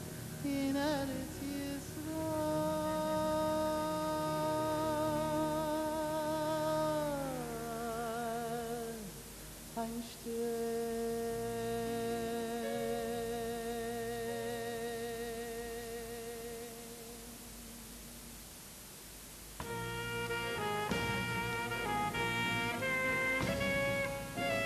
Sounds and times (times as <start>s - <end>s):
Music: 0.0s - 18.3s, 19.6s - 24.6s
Singing: 0.4s - 9.2s, 9.8s - 18.0s.